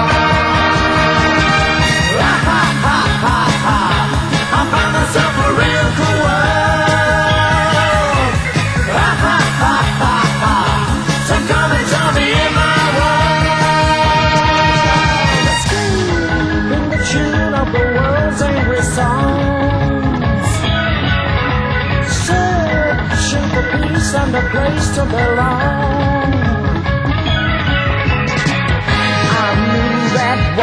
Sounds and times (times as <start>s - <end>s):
Music: 0.0s - 30.6s.